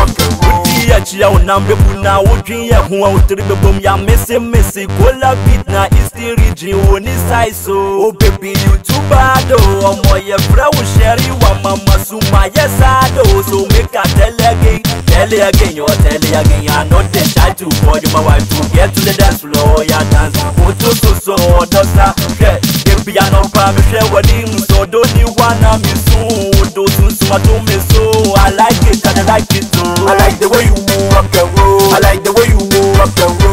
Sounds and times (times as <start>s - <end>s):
Rock and roll: 0.0s - 7.2s, 8.2s - 33.5s.